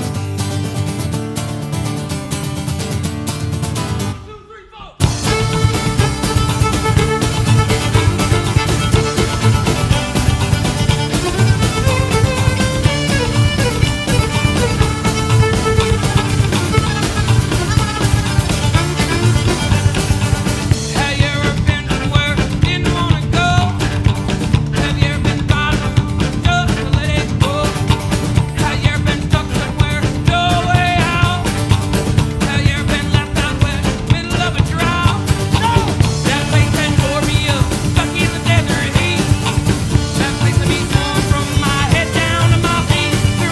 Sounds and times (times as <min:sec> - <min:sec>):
Music: 0:00.0 - 0:04.3, 0:05.0 - 0:43.5.